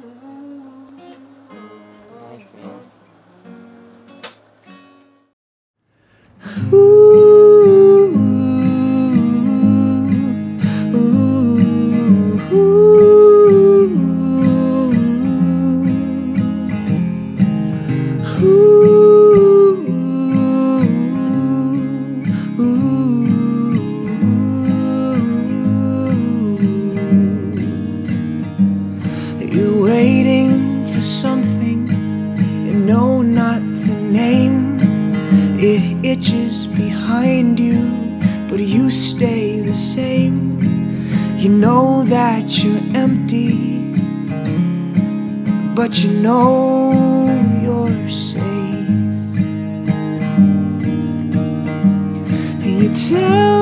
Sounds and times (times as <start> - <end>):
Music: 0.0 - 5.4, 6.4 - 53.6.